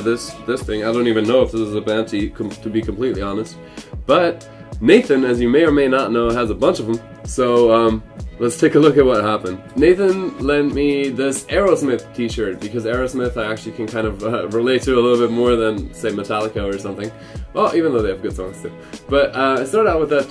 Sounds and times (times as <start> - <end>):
Speech: 0.0 - 20.3.